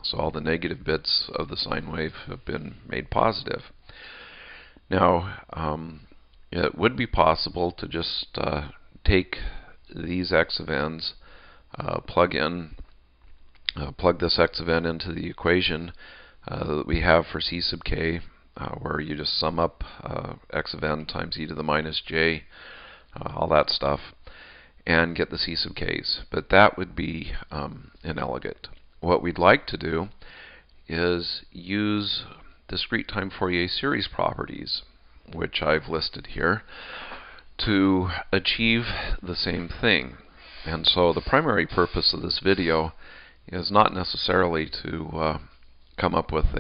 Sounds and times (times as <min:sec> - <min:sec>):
Speech: 0:00.0 - 0:03.8, 0:04.9 - 0:12.9, 0:13.7 - 0:22.5, 0:23.2 - 0:24.2, 0:24.8 - 0:30.2, 0:30.9 - 0:36.7, 0:37.6 - 0:46.6.